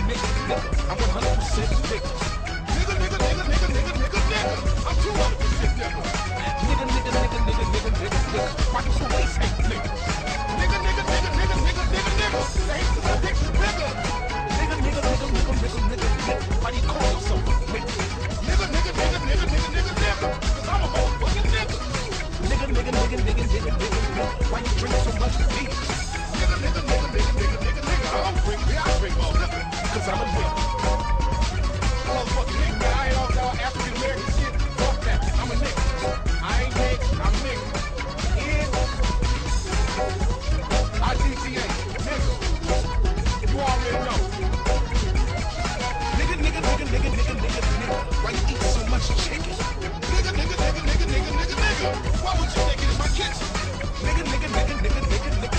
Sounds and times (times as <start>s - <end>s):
Speech: 0.0s - 45.4s, 46.1s - 55.5s
Music: 0.0s - 55.5s.